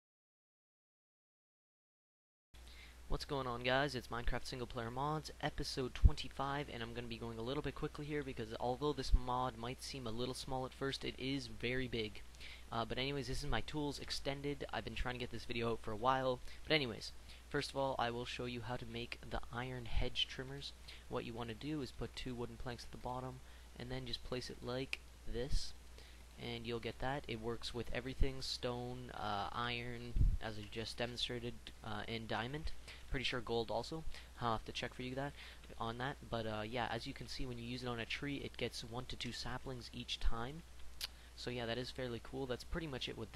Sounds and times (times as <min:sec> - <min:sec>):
Speech: 0:03.1 - 0:25.8, 0:26.4 - 0:40.7, 0:41.4 - 0:43.3.